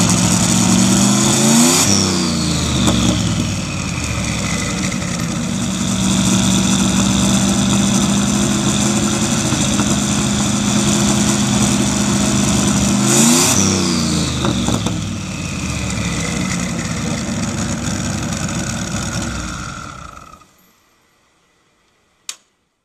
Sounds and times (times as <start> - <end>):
Race car, auto racing: 0.0 - 20.5
Outside, urban or manmade: 0.0 - 22.8.